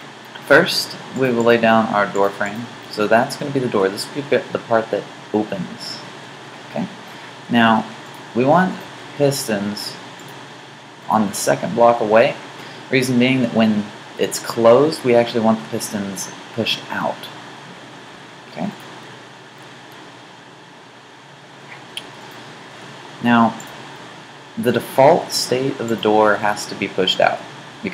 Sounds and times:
Speech: 0:00.4 - 0:06.0, 0:06.7 - 0:10.0, 0:11.1 - 0:17.4, 0:18.5 - 0:18.8, 0:23.2 - 0:23.6, 0:24.6 - 0:27.9.

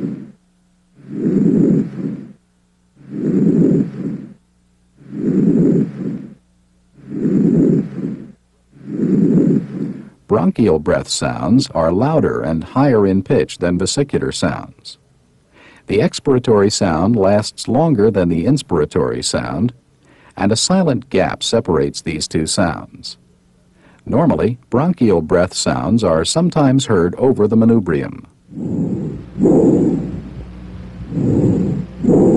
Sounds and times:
Speech: 0:10.3 - 0:15.0, 0:15.9 - 0:19.8, 0:20.4 - 0:23.2, 0:24.0 - 0:28.3.

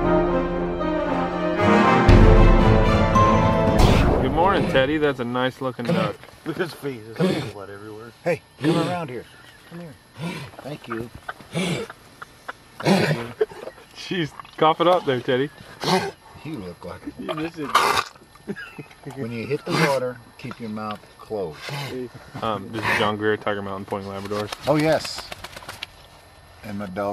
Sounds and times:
Animal: 0:08.6 - 0:18.3, 0:20.8 - 0:23.2.

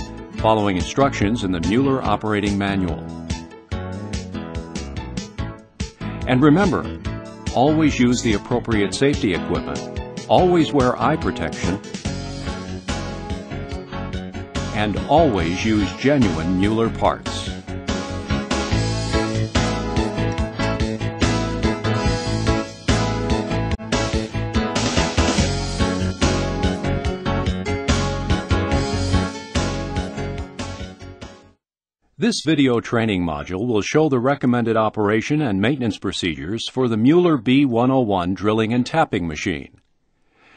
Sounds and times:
Music: 0:00.0 - 0:37.7
Speech: 0:00.4 - 0:03.1, 0:06.3 - 0:11.9, 0:14.8 - 0:17.6, 0:32.2 - 0:39.8.

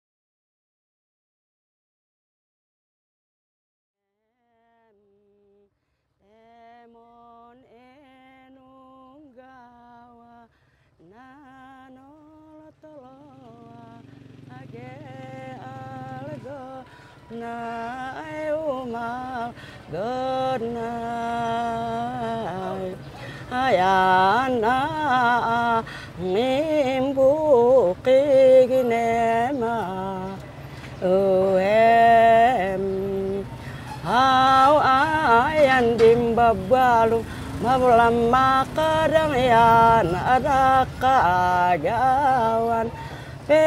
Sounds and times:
Outside, urban or manmade: 0:04.0 - 0:43.6.

